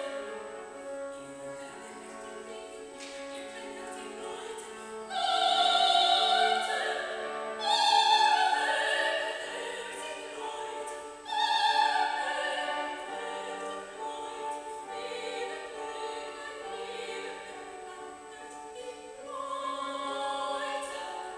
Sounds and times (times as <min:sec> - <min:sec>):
Music: 0:00.0 - 0:21.3
Female singing: 0:01.5 - 0:21.3.